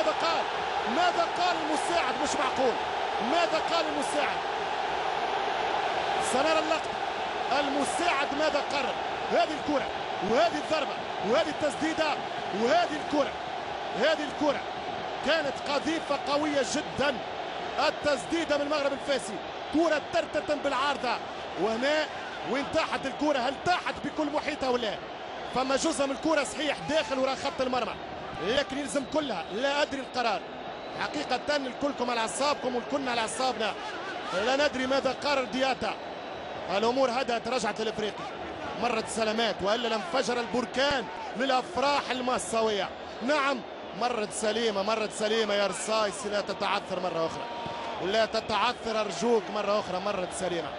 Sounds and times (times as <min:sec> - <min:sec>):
Speech: 0:00.0 - 0:04.4, 0:06.2 - 0:06.9, 0:07.5 - 0:13.4, 0:14.0 - 0:14.6, 0:15.3 - 0:17.2, 0:17.8 - 0:30.4, 0:31.0 - 0:36.0, 0:36.7 - 0:47.4, 0:48.0 - 0:50.7.